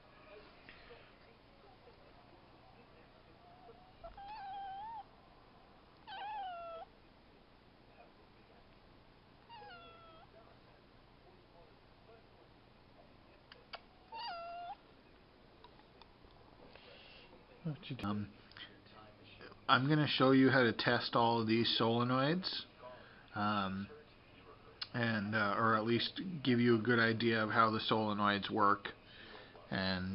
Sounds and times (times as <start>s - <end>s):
Inside, small room: 0.0s - 30.1s
Cat: 3.3s - 5.1s, 6.0s - 7.0s, 9.4s - 10.5s, 13.7s - 14.9s.